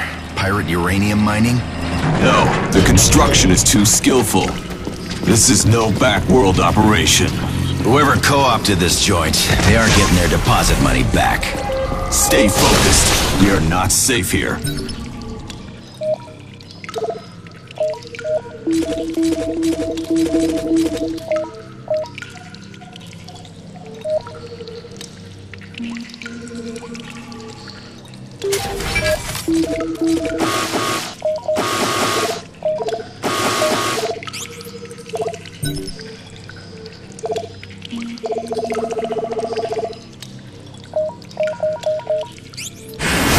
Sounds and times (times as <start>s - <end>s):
Speech: 0.4s - 1.6s, 2.2s - 4.6s, 5.3s - 14.6s.